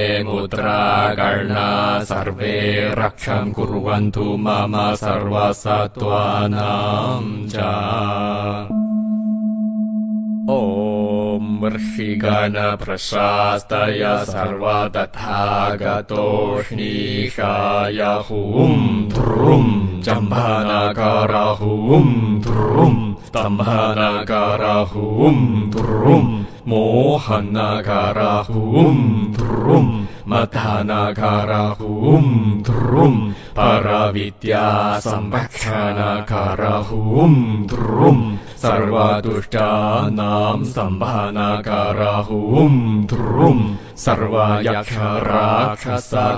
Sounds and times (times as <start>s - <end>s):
Mantra: 0.0s - 8.8s, 10.5s - 46.3s.